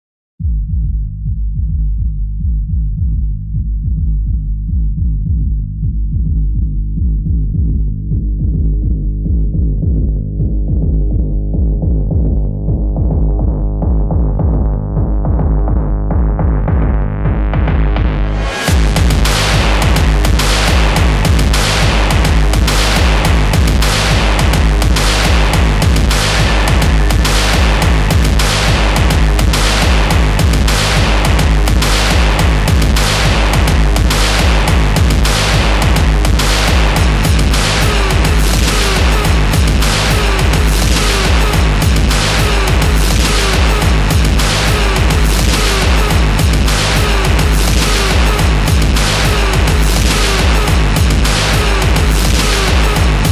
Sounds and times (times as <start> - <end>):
Music: 0.4 - 53.3.